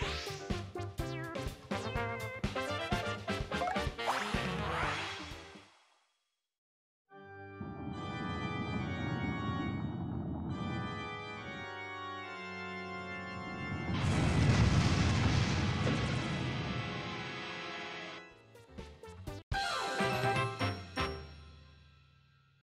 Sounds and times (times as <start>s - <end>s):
Music: 0.0s - 6.2s, 7.1s - 14.0s, 16.5s - 22.6s.